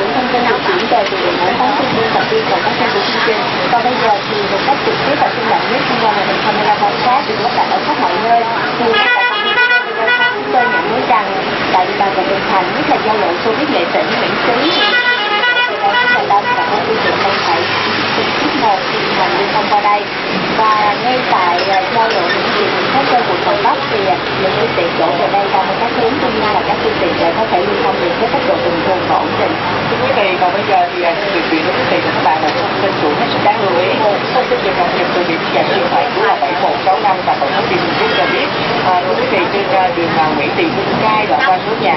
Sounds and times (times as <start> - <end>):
Speech: 0.0 - 41.9.